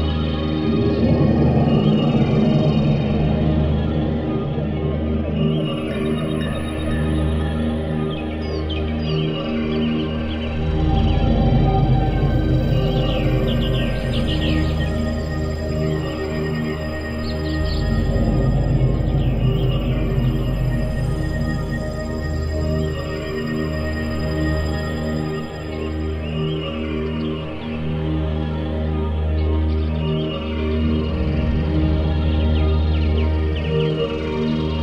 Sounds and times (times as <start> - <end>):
Scary music: 0.0 - 34.8.